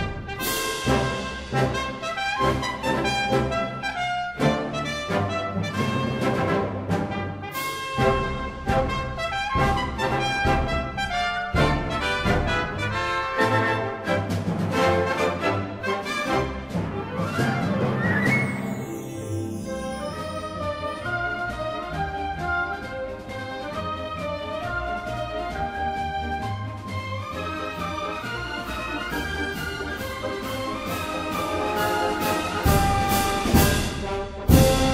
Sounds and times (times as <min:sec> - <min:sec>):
Orchestra: 0:00.0 - 0:34.9.